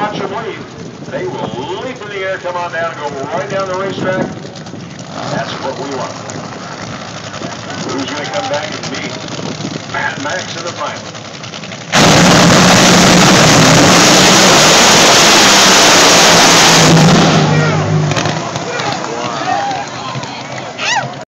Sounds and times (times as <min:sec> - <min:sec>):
Motorboat, speedboat: 0:00.0 - 0:21.2.